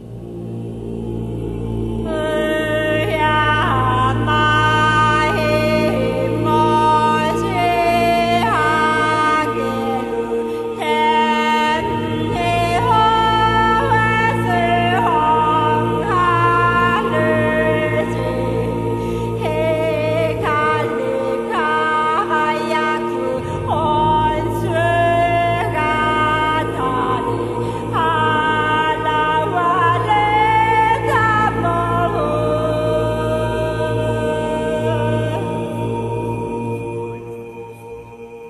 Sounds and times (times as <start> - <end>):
Music: 0.0 - 38.5.